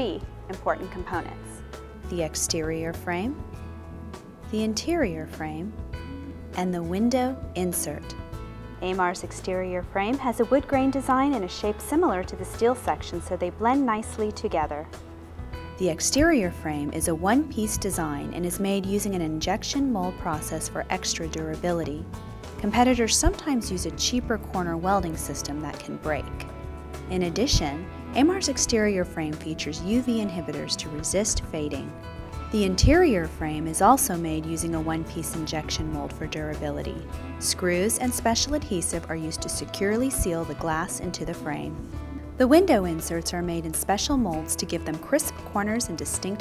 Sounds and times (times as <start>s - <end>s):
Speech: 0.0s - 3.4s, 4.5s - 5.7s, 6.6s - 8.2s, 8.8s - 14.9s, 15.8s - 22.0s, 22.6s - 26.4s, 27.1s - 31.9s, 32.6s - 41.8s, 42.4s - 46.4s
Music: 0.0s - 46.4s.